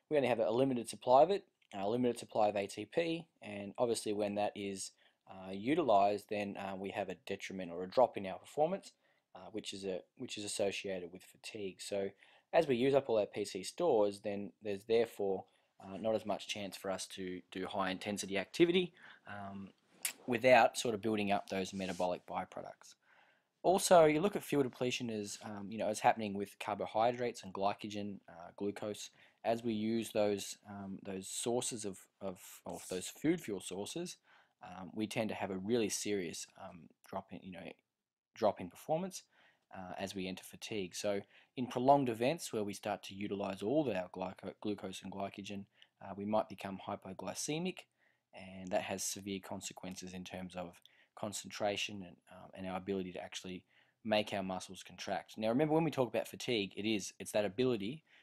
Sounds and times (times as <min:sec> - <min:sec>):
Speech: 0:00.0 - 0:23.0, 0:23.6 - 0:37.8, 0:38.4 - 0:58.1.